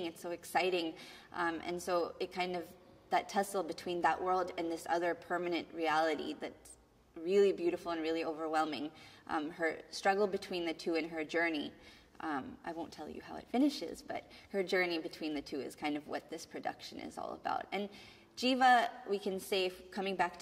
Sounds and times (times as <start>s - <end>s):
Inside, small room: 0.0s - 20.4s
Speech: 0.0s - 20.4s.